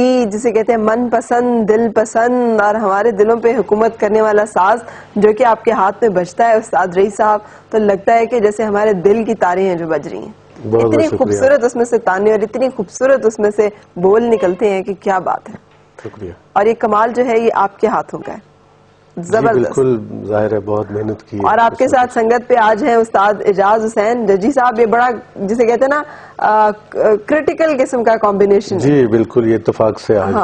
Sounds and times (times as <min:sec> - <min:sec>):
Speech: 0:09.1 - 0:11.7, 0:14.0 - 0:17.2, 0:19.2 - 0:23.3, 0:28.8 - 0:30.4.